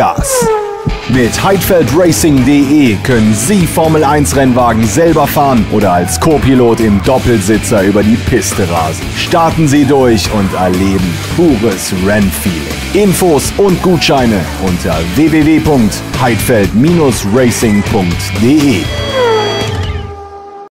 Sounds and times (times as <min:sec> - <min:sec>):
Speech: 0:00.0 - 0:00.5, 0:01.1 - 0:18.9
Music: 0:00.0 - 0:20.7.